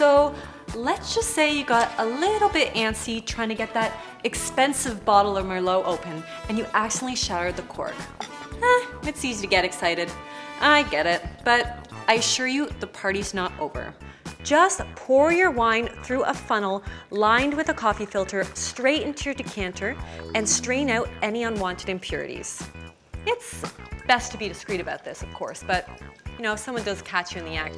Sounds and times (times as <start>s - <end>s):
Speech: 0.0s - 8.0s, 8.6s - 22.7s, 23.3s - 27.7s
Music: 0.0s - 27.7s.